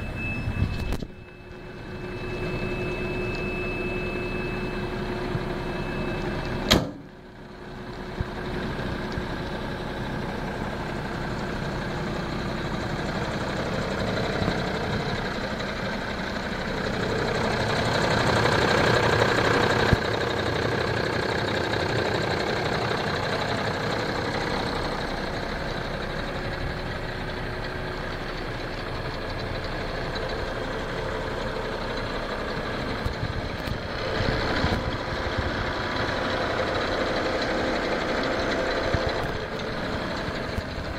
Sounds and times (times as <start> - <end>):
Truck: 0.0 - 40.9.